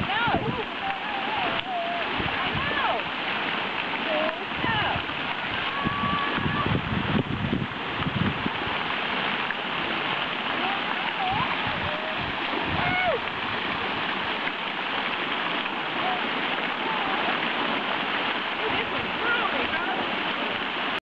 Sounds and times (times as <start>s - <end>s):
Speech: 0.0s - 3.0s, 4.1s - 5.0s, 10.6s - 12.2s, 18.6s - 20.2s.